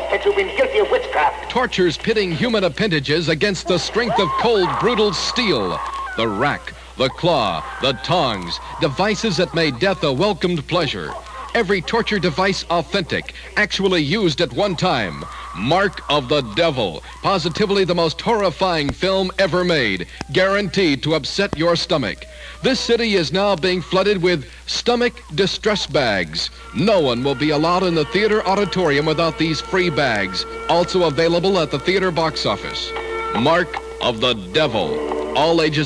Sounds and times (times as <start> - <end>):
Speech: 0.0 - 35.8.